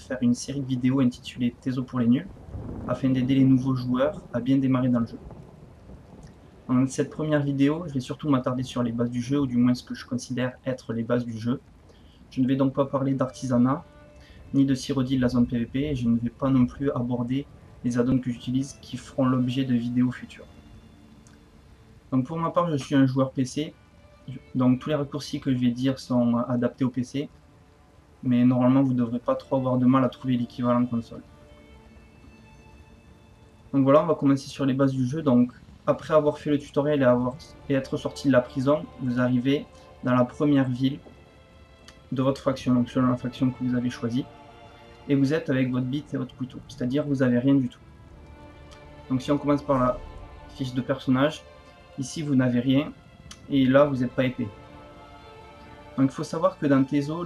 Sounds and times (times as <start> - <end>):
Speech: 0.0 - 2.3, 2.9 - 5.2, 6.7 - 11.6, 12.3 - 13.9, 14.5 - 20.5, 22.1 - 27.3, 28.2 - 31.2, 33.8 - 41.0, 42.1 - 44.3, 45.1 - 47.8, 49.1 - 51.4, 52.0 - 54.6, 56.0 - 57.2.